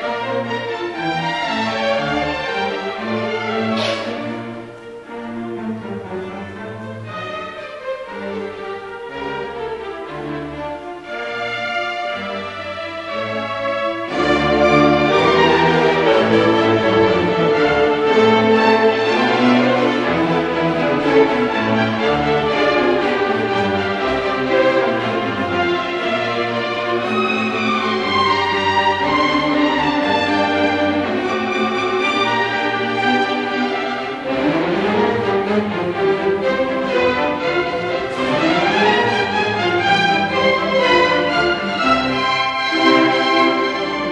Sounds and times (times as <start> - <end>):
Orchestra: 0.0 - 44.1
Violin, fiddle: 0.0 - 44.1.